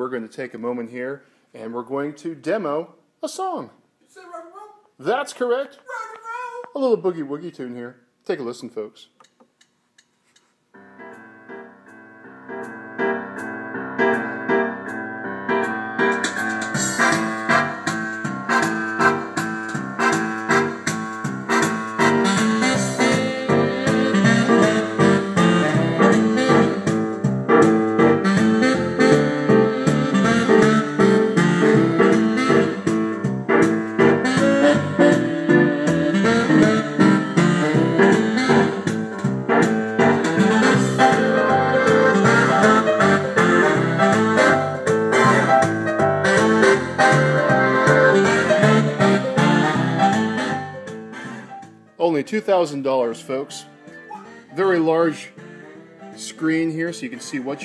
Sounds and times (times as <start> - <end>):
Speech: 0.0 - 9.2, 52.0 - 53.7, 54.6 - 55.4, 56.2 - 57.6.